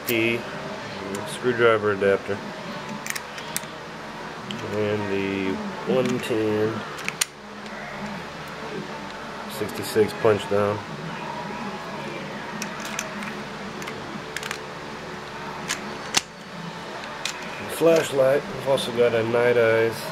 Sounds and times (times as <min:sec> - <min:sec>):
Speech: 0:04.6 - 0:06.8, 0:09.5 - 0:10.8, 0:17.6 - 0:20.1.